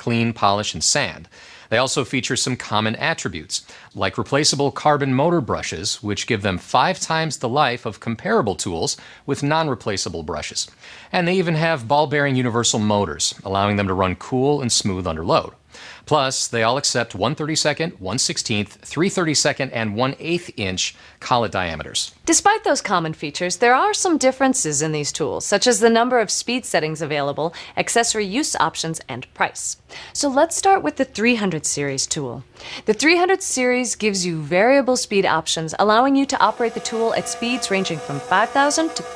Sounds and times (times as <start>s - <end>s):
Speech: 0.0s - 39.1s.